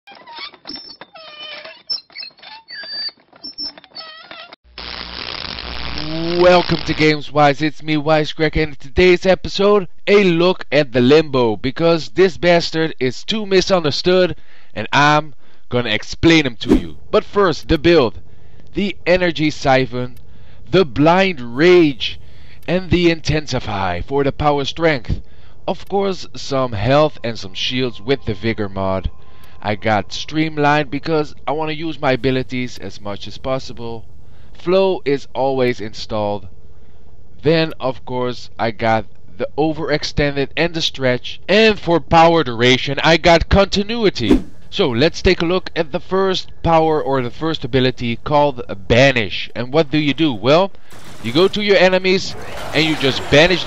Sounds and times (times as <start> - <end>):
Speech: 6.0 - 18.2, 18.8 - 34.0, 34.6 - 36.5, 37.4 - 53.6.